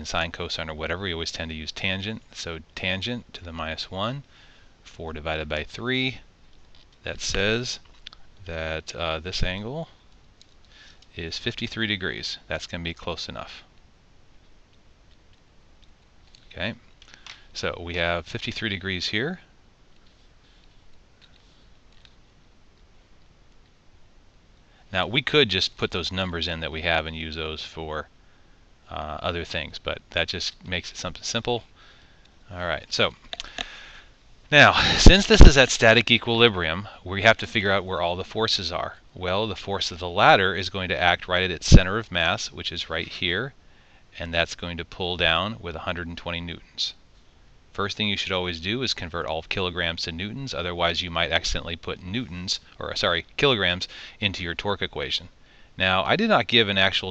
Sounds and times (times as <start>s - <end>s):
Speech: 0.0s - 6.3s, 7.0s - 10.0s, 11.1s - 13.7s, 16.5s - 16.8s, 17.5s - 19.5s, 24.9s - 28.1s, 28.9s - 31.7s, 32.5s - 33.2s, 34.5s - 43.6s, 44.2s - 47.0s, 47.7s - 57.1s.